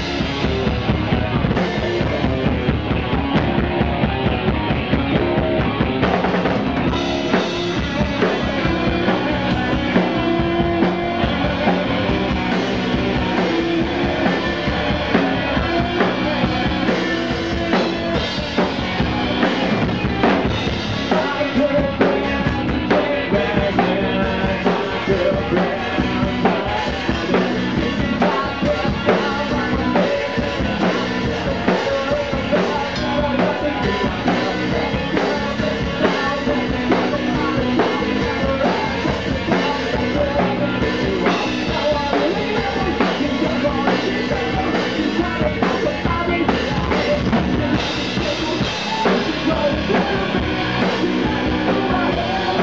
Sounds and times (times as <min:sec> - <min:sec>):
Drum: 0:00.0 - 0:52.6
Drum kit: 0:00.0 - 0:52.6.